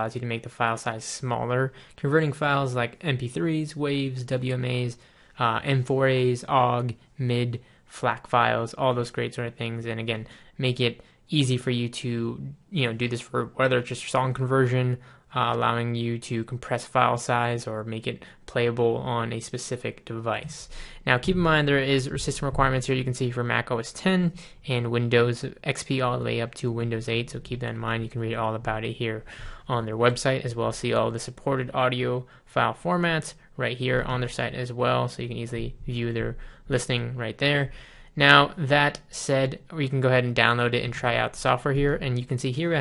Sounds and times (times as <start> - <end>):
Speech: 0.0 - 42.8.